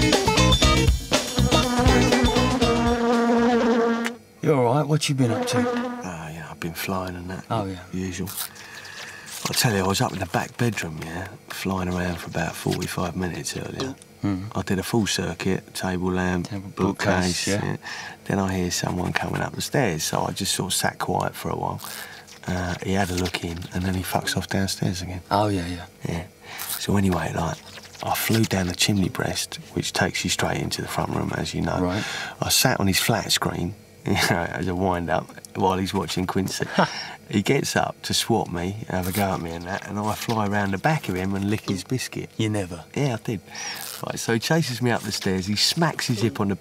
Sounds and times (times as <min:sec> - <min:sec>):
Speech: 0:04.4 - 0:08.4, 0:09.4 - 0:21.8, 0:22.4 - 0:46.6.